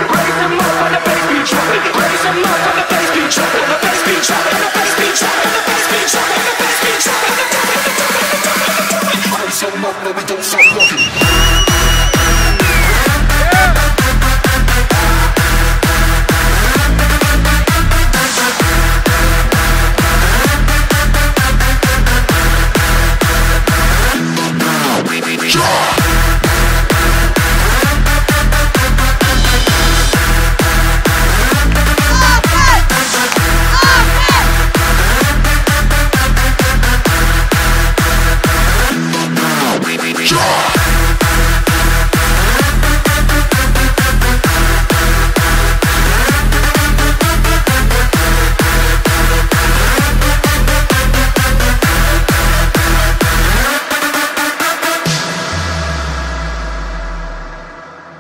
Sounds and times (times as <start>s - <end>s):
Electronic dance music: 0.0s - 57.8s.